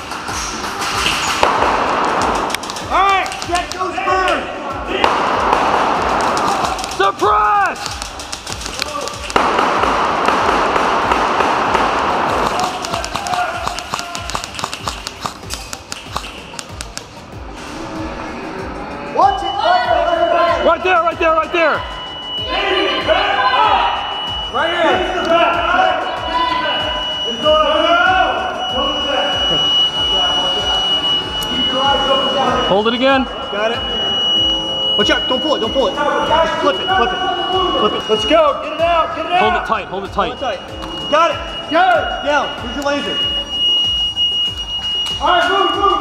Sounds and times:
Music: 0.0 - 46.0.

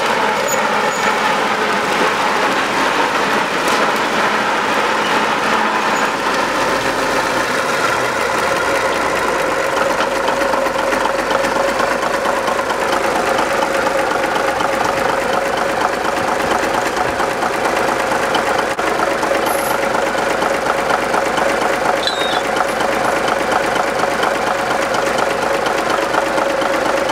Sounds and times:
Engine: 0.0 - 27.1
Outside, rural or natural: 0.0 - 27.1
Vehicle: 0.0 - 27.1.

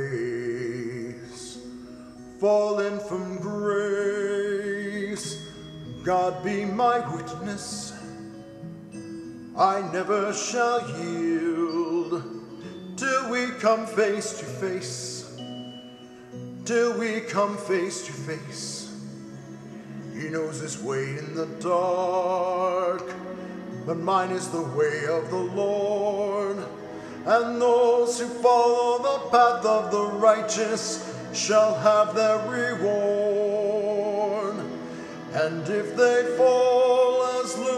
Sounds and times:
Male singing: 0.0 - 1.7, 2.4 - 8.1, 9.6 - 12.4, 13.0 - 15.4, 16.6 - 19.0, 20.1 - 37.7
Music: 0.0 - 37.7.

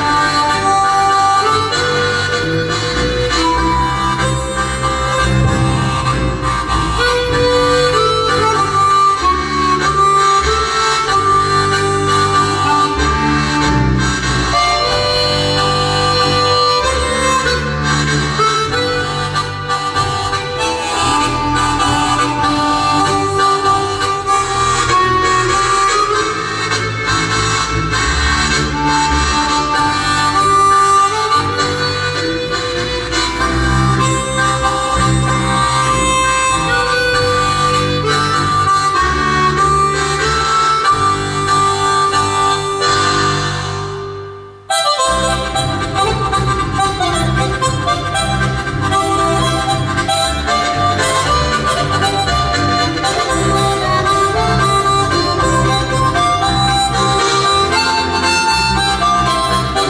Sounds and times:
Harmonica: 0.0 - 59.8.

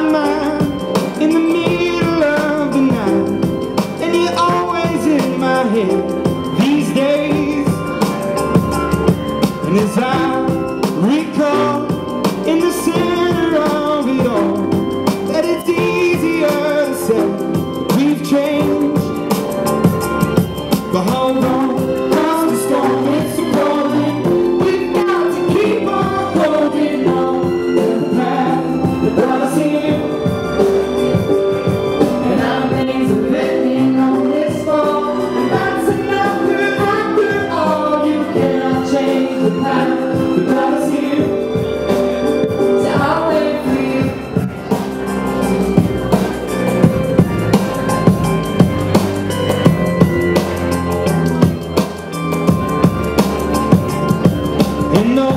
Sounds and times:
Male singing: 0.0 - 3.4, 4.0 - 7.8, 9.7 - 14.7, 15.3 - 19.1, 20.9 - 30.1, 32.3 - 41.4, 54.9 - 55.3
Music: 0.0 - 55.3.

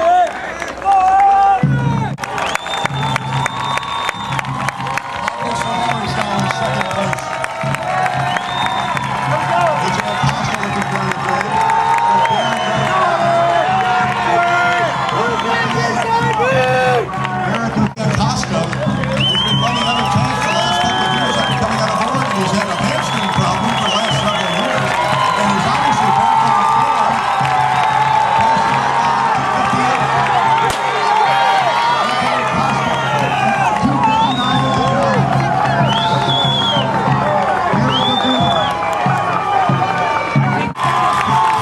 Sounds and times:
Speech: 5.2 - 7.4, 9.3 - 13.4, 14.4 - 27.3, 28.4 - 30.3, 32.0 - 35.3.

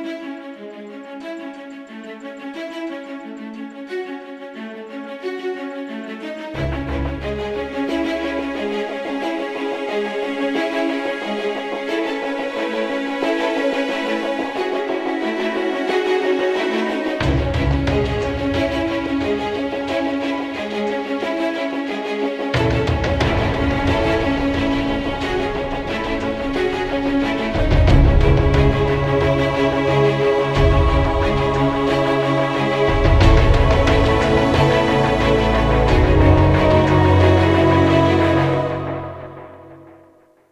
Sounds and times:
Music: 0.0 - 40.5.

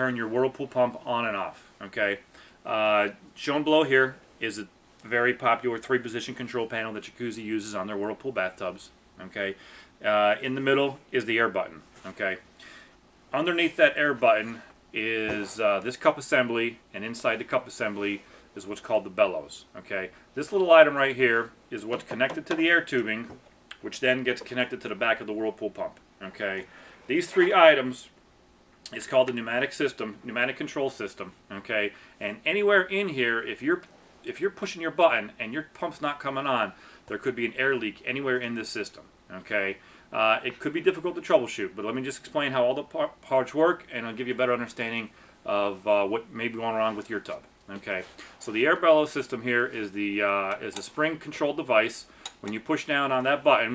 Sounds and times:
Speech: 0.0 - 12.5, 13.3 - 28.2, 28.9 - 53.7.

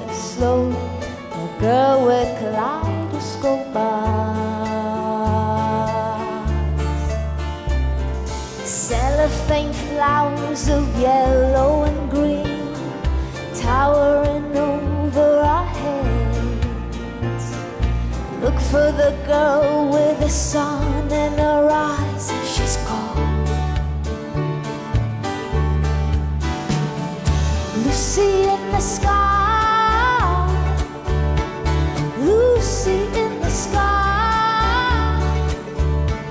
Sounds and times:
Music: 0.0 - 36.3.

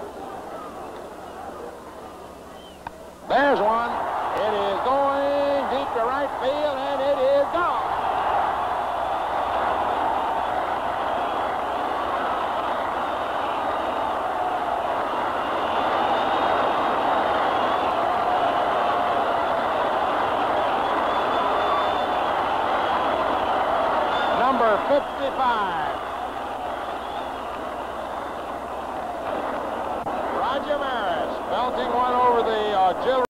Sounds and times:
Speech: 3.3 - 7.8, 24.4 - 26.0, 30.4 - 33.2.

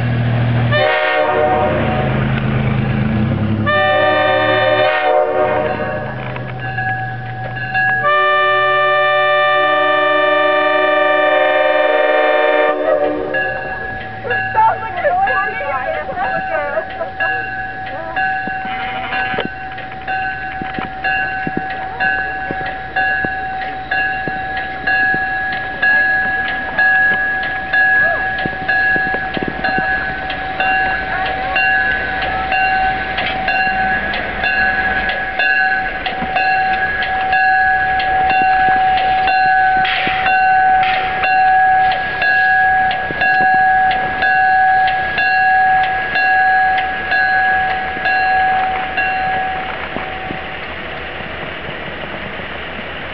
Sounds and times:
Railroad car, train wagon: 0.0 - 53.1
Train horn: 0.7 - 2.2, 3.6 - 6.2, 8.0 - 13.7, 18.6 - 19.5
Speech: 14.6 - 18.3.

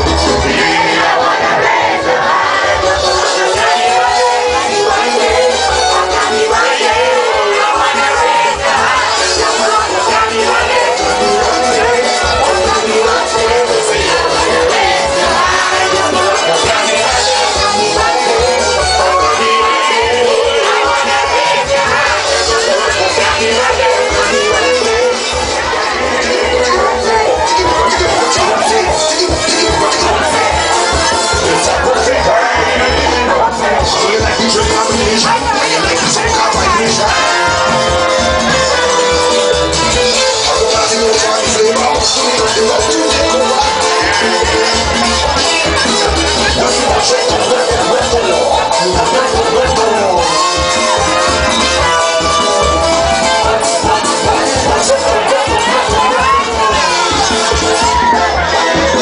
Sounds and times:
Music: 0.0 - 59.0.

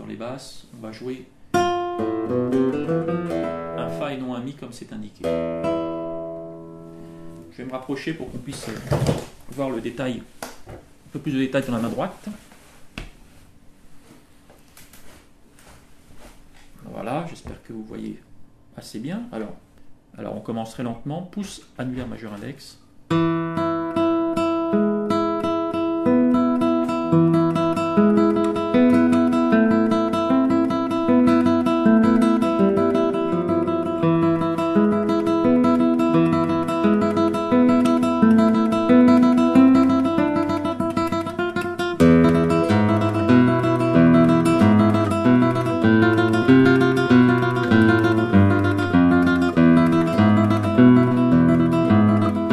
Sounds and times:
Flamenco: 23.2 - 52.5.

